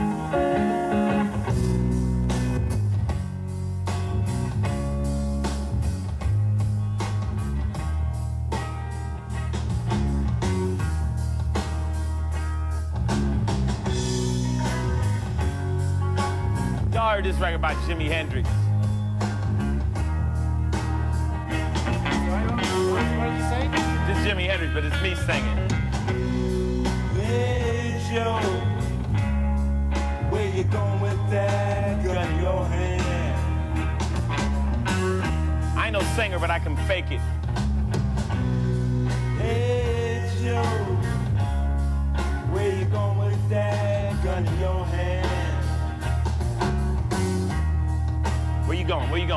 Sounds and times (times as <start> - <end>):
Music: 0.0 - 49.3
Speech: 16.9 - 18.6, 22.1 - 25.7, 35.8 - 37.3, 48.7 - 49.3
Male singing: 27.1 - 28.8, 30.2 - 33.5, 39.4 - 41.1, 42.4 - 45.7.